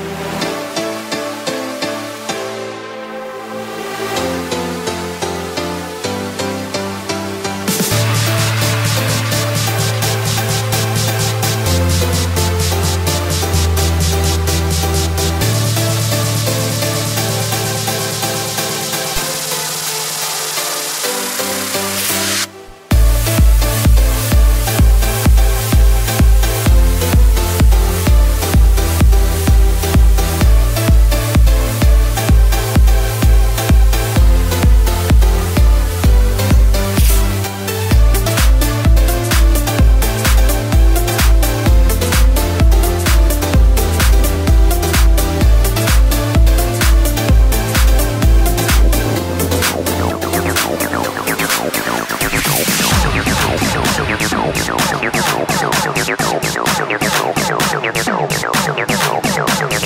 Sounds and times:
Techno: 3.9 - 59.8.

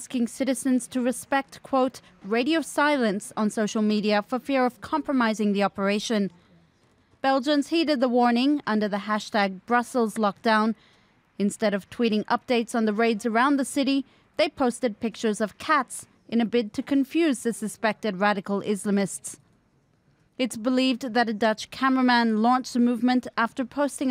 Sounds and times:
Speech: 0.0 - 6.3, 7.3 - 10.8, 11.4 - 19.4, 20.4 - 24.1.

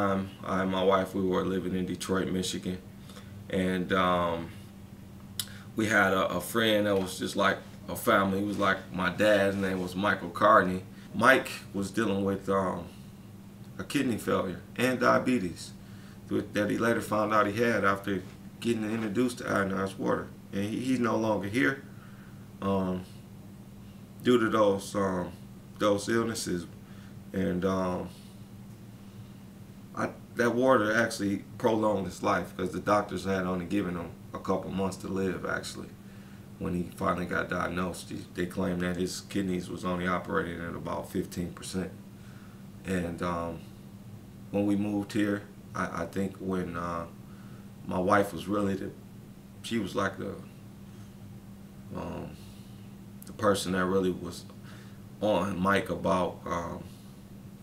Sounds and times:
Speech: 0.0 - 2.9, 3.5 - 4.6, 5.8 - 13.0, 13.8 - 21.9, 22.6 - 23.2, 24.2 - 28.2, 29.9 - 36.0, 36.6 - 42.0, 42.8 - 43.7, 44.5 - 47.2, 47.8 - 49.0, 49.6 - 50.5, 51.9 - 52.4, 53.2 - 54.5, 55.2 - 57.0.

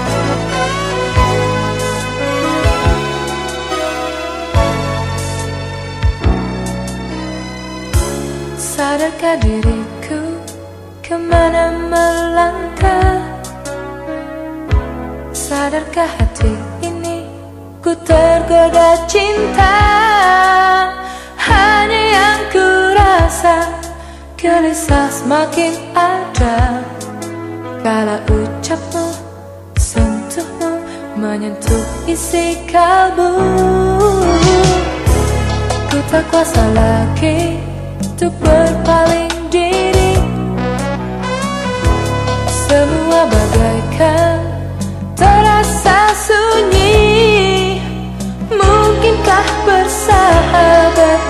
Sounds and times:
Music: 0.0 - 51.2.

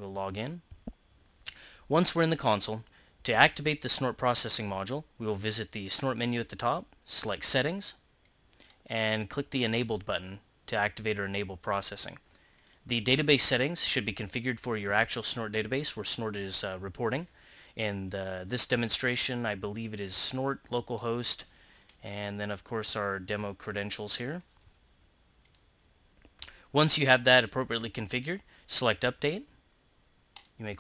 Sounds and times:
Speech: 0.0 - 0.7, 1.9 - 8.0, 8.9 - 12.2, 12.9 - 24.5, 26.7 - 29.6, 30.6 - 30.8.

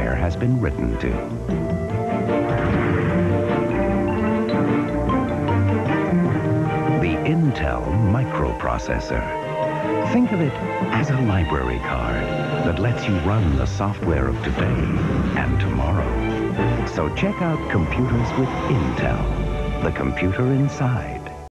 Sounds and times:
Speech: 0.0 - 1.3, 7.0 - 9.3, 10.0 - 16.2, 16.8 - 21.4
Music: 0.0 - 21.5.

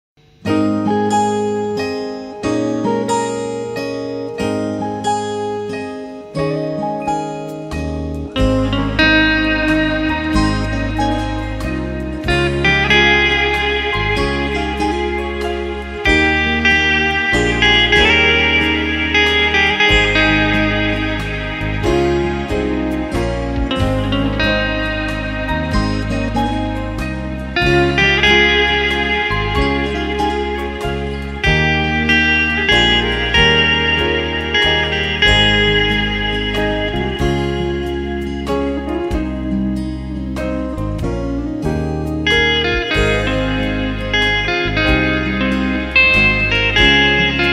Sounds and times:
Bass guitar: 0.2 - 47.5.

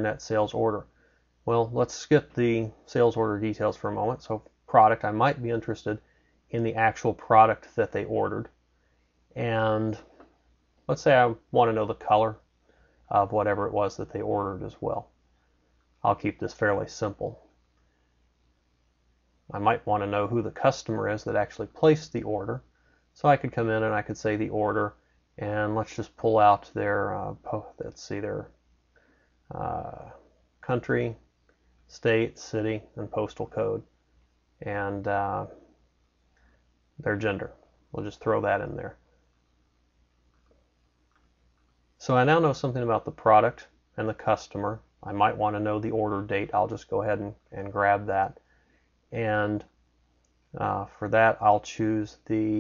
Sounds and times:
Speech: 0.0 - 0.9, 1.5 - 8.5, 9.4 - 10.1, 10.9 - 12.4, 13.1 - 15.1, 16.0 - 17.4, 19.5 - 22.6, 23.2 - 28.5, 29.5 - 31.2, 31.9 - 33.9, 34.6 - 35.7, 37.0 - 39.0, 42.0 - 48.4, 49.1 - 49.7, 50.6 - 52.6.

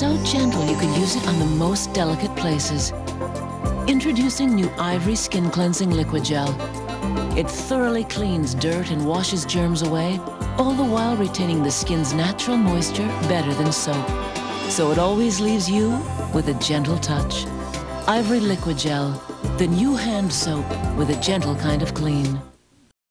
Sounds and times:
Speech: 0.0 - 3.0, 3.9 - 6.6, 7.4 - 22.6
Music: 0.0 - 22.6.

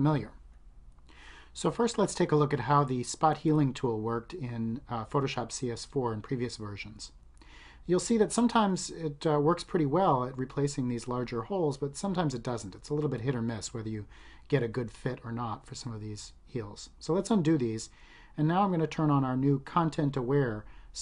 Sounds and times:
Speech: 0.0 - 0.4, 1.6 - 7.2, 7.9 - 21.0.

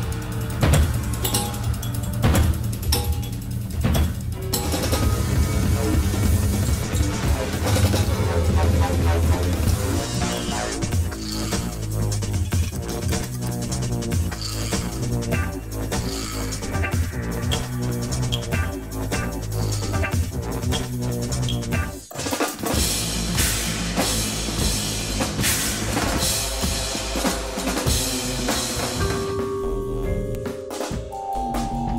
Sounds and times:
Percussion: 0.0 - 31.9.

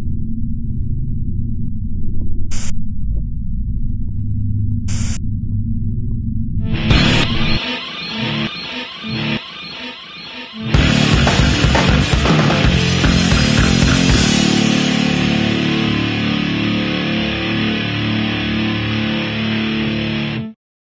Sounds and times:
Strum: 6.6 - 20.2
Electric guitar: 6.7 - 20.6.

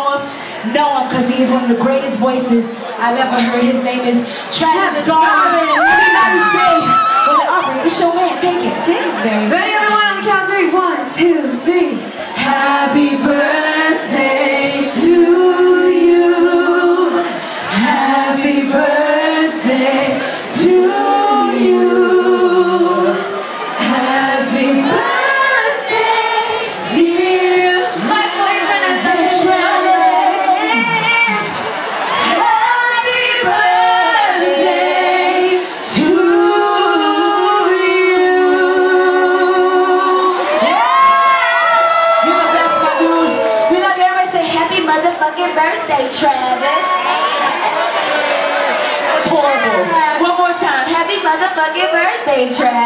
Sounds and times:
Female singing: 9.4 - 31.6, 32.2 - 40.8.

